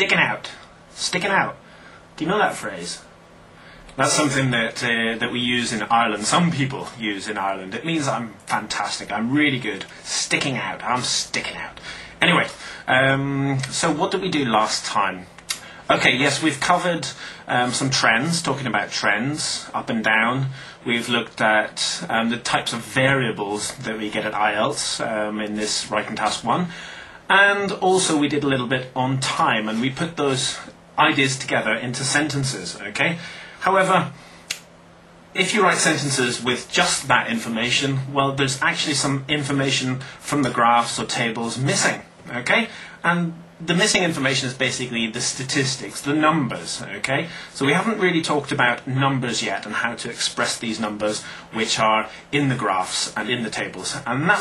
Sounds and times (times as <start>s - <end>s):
Speech: 0.0s - 1.6s, 2.2s - 3.1s, 3.9s - 34.2s, 35.4s - 54.4s.